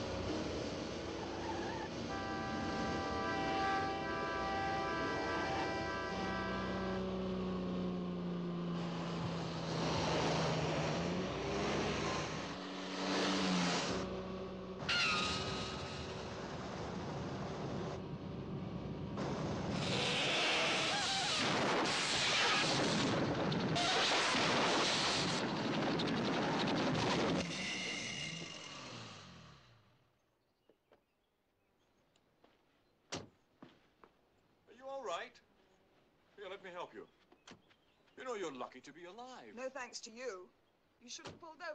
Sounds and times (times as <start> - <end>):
Car: 0.0 - 4.8, 5.4 - 30.1
Outside, rural or natural: 0.0 - 41.7.